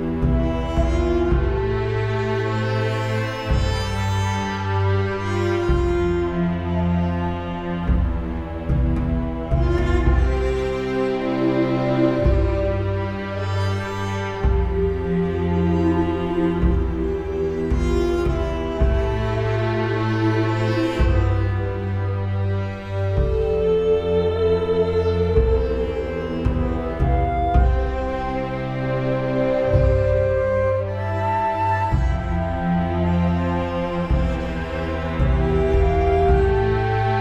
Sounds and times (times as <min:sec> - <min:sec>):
Sad music: 0:00.0 - 0:37.2.